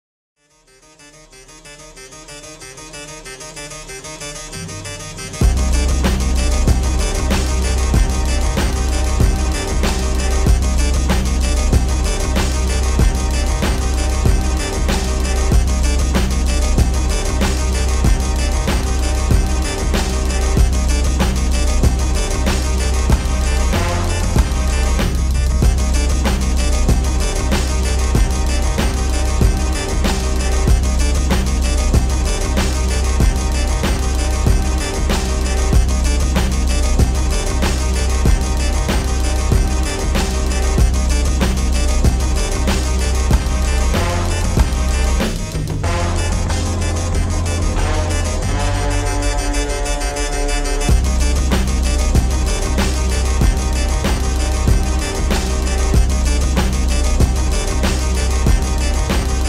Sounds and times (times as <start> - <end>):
Music: 0.4 - 59.4.